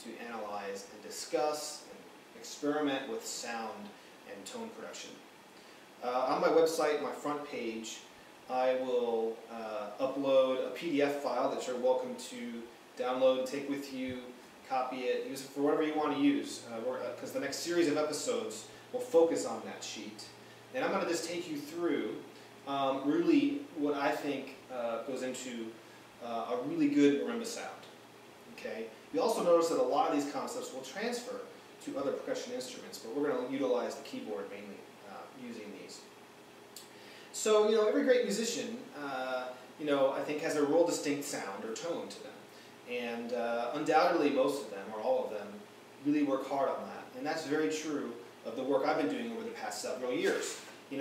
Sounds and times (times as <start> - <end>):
Speech: 0.0 - 5.3, 6.0 - 36.1, 37.3 - 51.0.